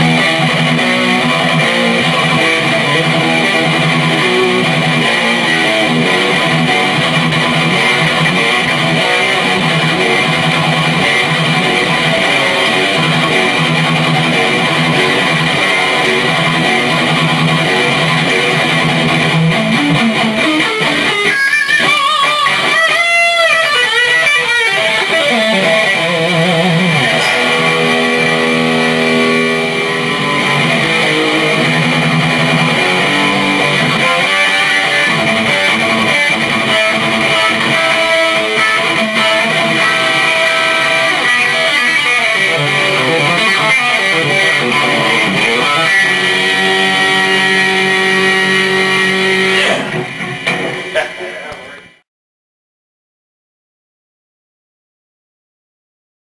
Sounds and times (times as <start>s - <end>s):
Bass guitar: 0.0s - 52.0s
Strum: 24.8s - 51.7s.